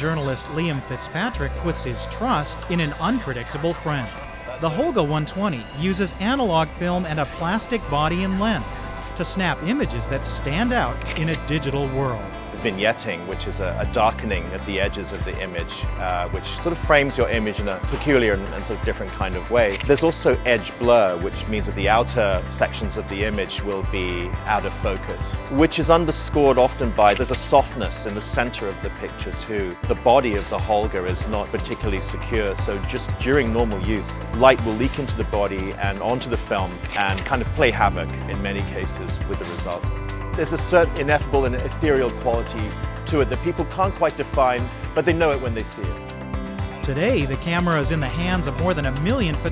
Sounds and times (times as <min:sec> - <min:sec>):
Speech: 0:00.0 - 0:46.0, 0:46.8 - 0:49.5
Music: 0:00.0 - 0:49.5
Single-lens reflex camera: 0:11.0 - 0:11.4, 0:19.7 - 0:19.9, 0:36.8 - 0:37.3.